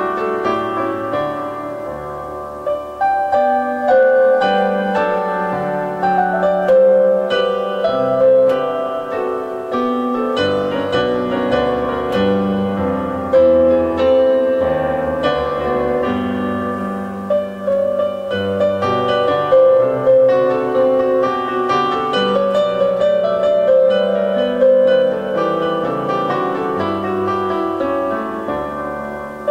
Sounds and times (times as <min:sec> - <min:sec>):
Harpsichord: 0:00.0 - 0:29.5.